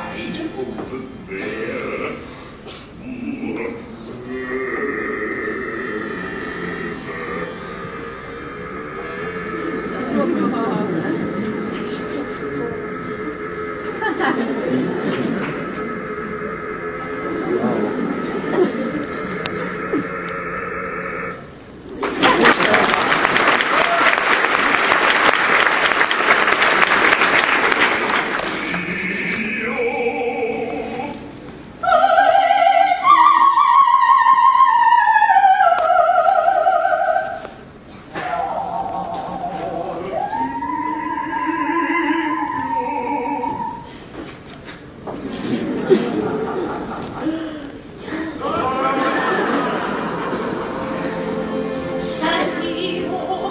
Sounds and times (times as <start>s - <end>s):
Inside, large room or hall: 0.0s - 53.5s
Music: 50.4s - 53.5s.